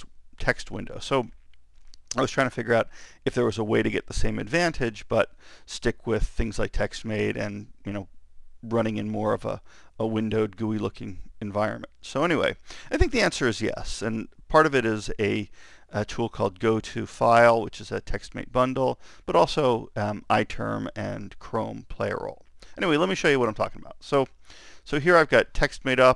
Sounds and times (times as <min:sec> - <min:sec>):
Speech: 0:00.0 - 0:01.4, 0:02.1 - 0:08.1, 0:08.7 - 0:24.3, 0:24.9 - 0:26.1.